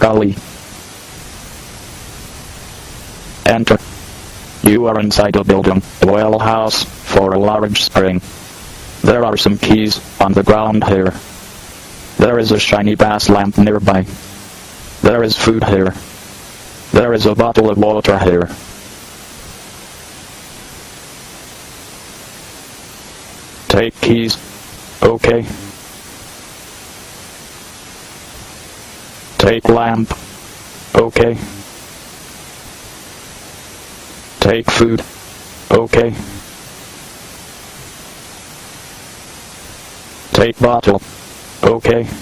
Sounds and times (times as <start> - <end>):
Speech: 0.0 - 0.4, 3.4 - 3.8, 4.6 - 8.3, 9.0 - 11.2, 12.2 - 14.2, 15.0 - 16.0, 16.9 - 18.6, 23.7 - 24.4, 25.0 - 25.8, 29.4 - 30.2, 30.9 - 31.7, 34.4 - 35.1, 35.7 - 36.4, 40.3 - 41.0, 41.6 - 42.2.